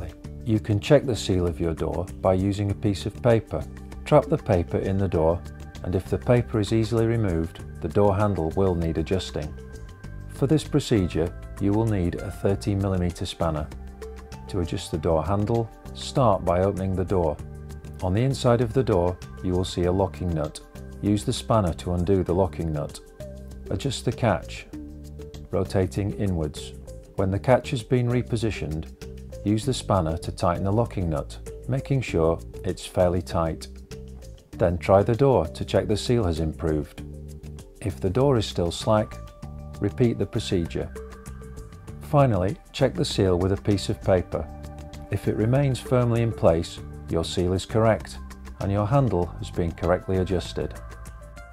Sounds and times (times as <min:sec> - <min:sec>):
Speech: 0:00.0 - 0:09.6, 0:10.3 - 0:13.8, 0:14.5 - 0:17.4, 0:18.0 - 0:23.1, 0:23.7 - 0:24.8, 0:25.5 - 0:33.7, 0:34.6 - 0:37.0, 0:37.8 - 0:39.2, 0:39.8 - 0:41.0, 0:42.0 - 0:44.5, 0:45.1 - 0:50.8
Music: 0:00.0 - 0:51.5.